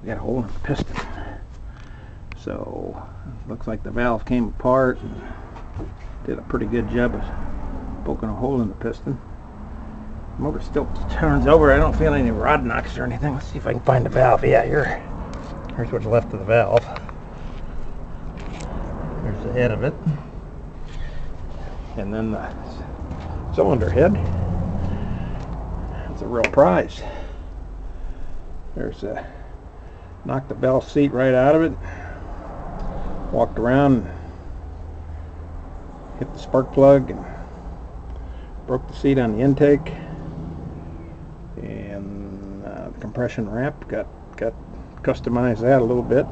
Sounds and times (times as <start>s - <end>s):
Speech: 0.0s - 1.4s, 2.4s - 5.3s, 6.2s - 7.4s, 8.0s - 9.2s, 10.4s - 15.1s, 15.7s - 17.0s, 19.2s - 20.2s, 22.0s - 22.9s, 23.5s - 24.3s, 26.1s - 27.2s, 28.8s - 29.4s, 30.3s - 31.8s, 33.3s - 34.2s, 36.2s - 37.4s, 38.7s - 40.1s, 41.6s - 46.3s
Vehicle: 0.0s - 46.3s.